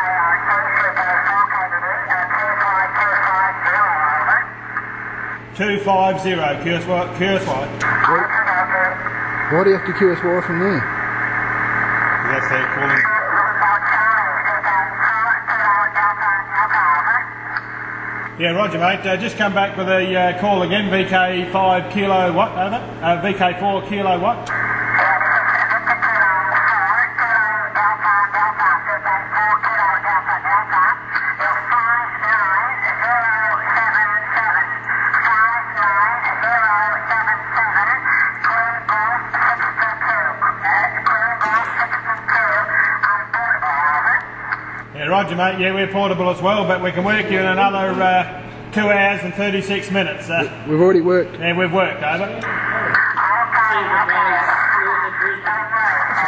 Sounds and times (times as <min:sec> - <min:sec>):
Radio: 0:00.0 - 0:50.6, 0:51.4 - 0:56.2.